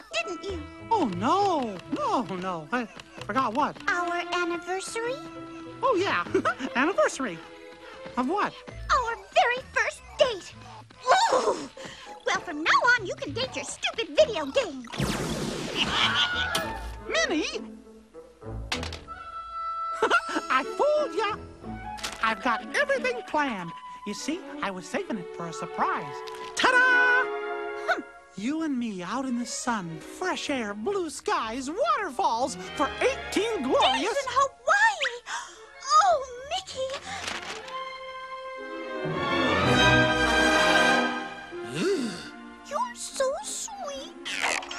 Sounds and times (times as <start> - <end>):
Music: 0.0 - 44.7.